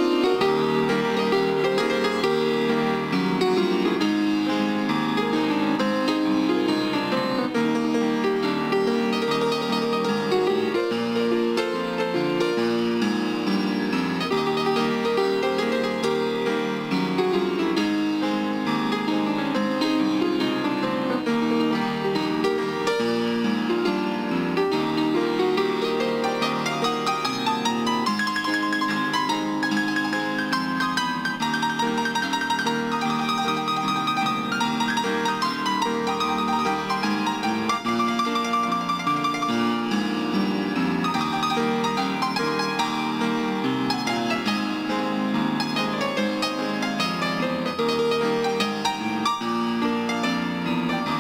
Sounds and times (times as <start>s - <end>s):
Gospel music: 0.0s - 51.2s
Piano: 0.0s - 51.2s.